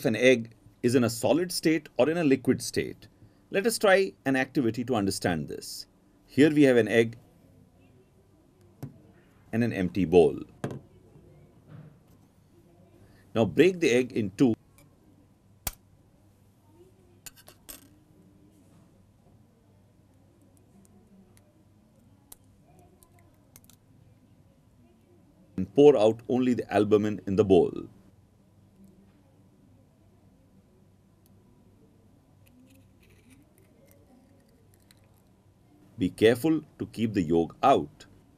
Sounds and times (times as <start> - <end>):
Speech: 0.0 - 7.2, 7.8 - 11.5, 12.6 - 14.6, 24.3 - 28.0, 35.8 - 38.1
Inside, small room: 0.0 - 38.3.